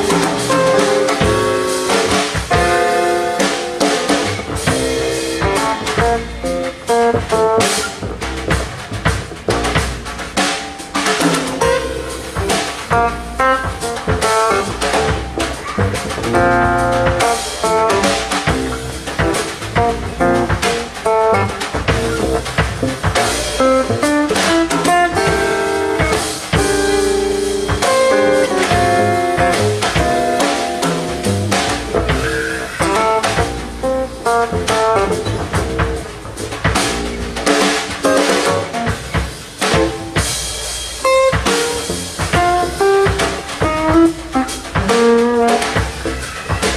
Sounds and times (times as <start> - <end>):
Bass drum: 0.0 - 46.7
Double bass: 0.0 - 46.7
Drum kit: 0.0 - 46.7
Rimshot: 0.0 - 46.7.